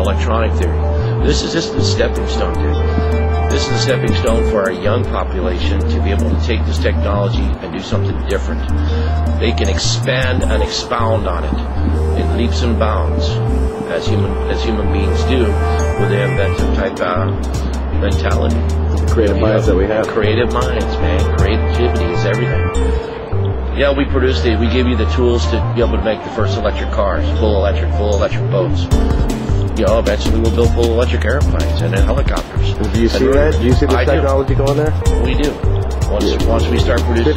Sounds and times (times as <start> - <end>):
Speech: 0.0 - 2.9, 3.5 - 17.4, 18.0 - 22.7, 23.8 - 29.0, 29.8 - 37.3
Music: 0.0 - 37.3.